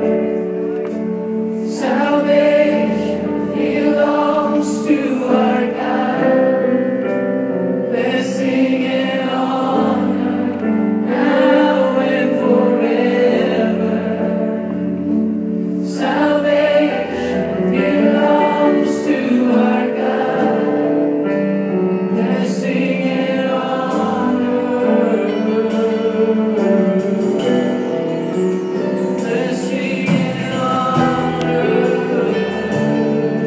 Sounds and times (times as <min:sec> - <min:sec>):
Music: 0:00.0 - 0:33.4.